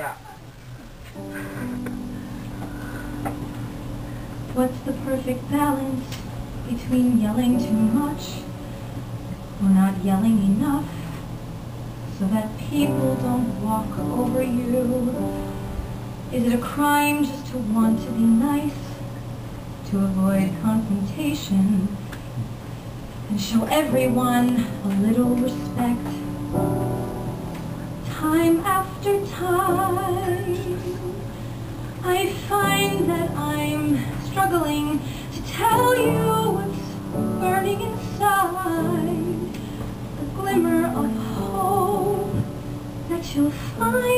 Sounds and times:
Music: 0:00.9 - 0:44.1
Female singing: 0:04.6 - 0:08.5, 0:09.6 - 0:11.0, 0:12.2 - 0:15.2, 0:16.4 - 0:19.0, 0:19.9 - 0:22.0, 0:23.3 - 0:26.3, 0:28.1 - 0:31.3, 0:32.0 - 0:39.5, 0:40.2 - 0:42.5, 0:43.1 - 0:44.1.

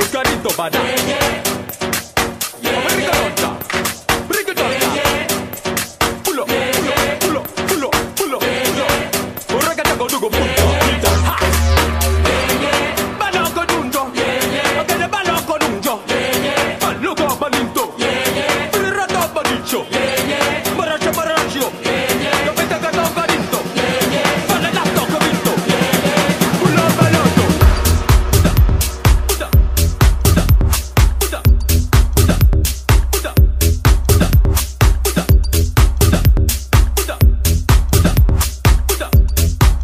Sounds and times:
Afrobeat: 0:00.0 - 0:17.8, 0:18.9 - 0:39.8.

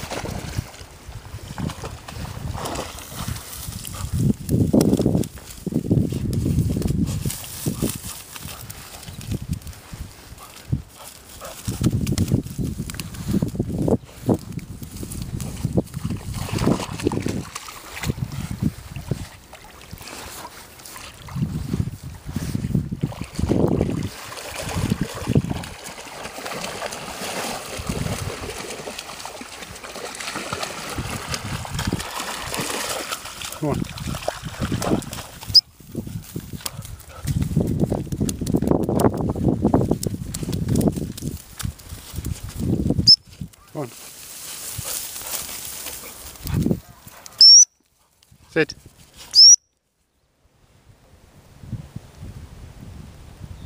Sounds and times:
Stream: 0:00.0 - 0:53.6.

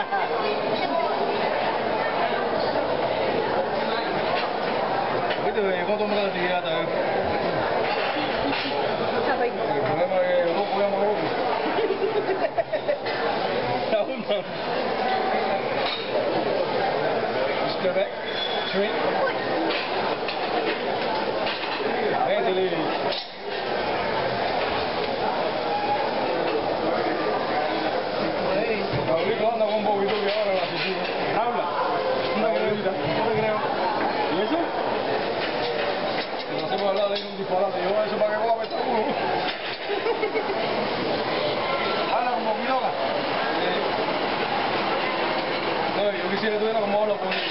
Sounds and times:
Inside, public space: 0:00.0 - 0:47.5.

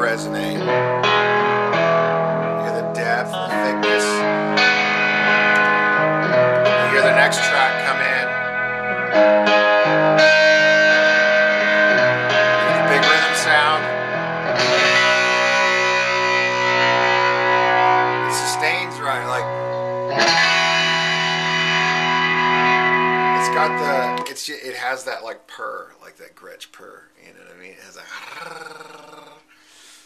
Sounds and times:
Speech: 0:00.0 - 0:00.7, 0:02.6 - 0:04.3, 0:06.8 - 0:08.3, 0:12.6 - 0:13.9, 0:18.3 - 0:19.5, 0:23.4 - 0:29.4
Music: 0:00.0 - 0:25.2.

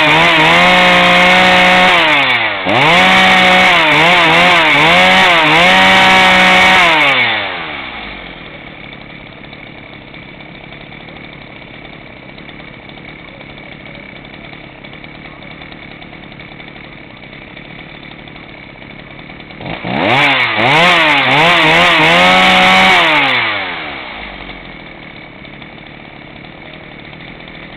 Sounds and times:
Chainsaw: 0:00.0 - 0:27.7.

